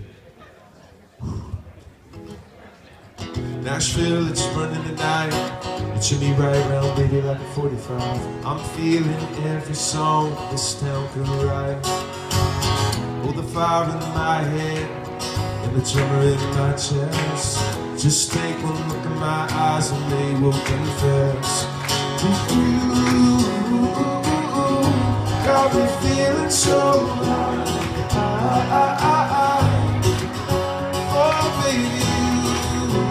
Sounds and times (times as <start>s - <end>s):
Music: 3.4s - 33.1s.